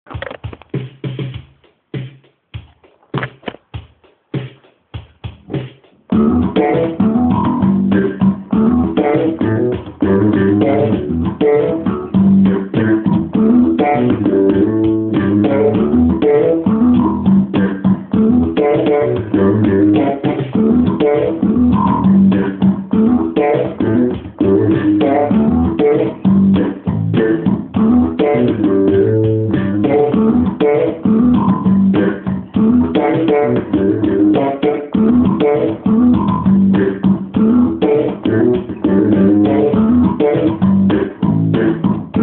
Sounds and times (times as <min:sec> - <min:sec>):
Bass guitar: 0:05.4 - 0:42.2.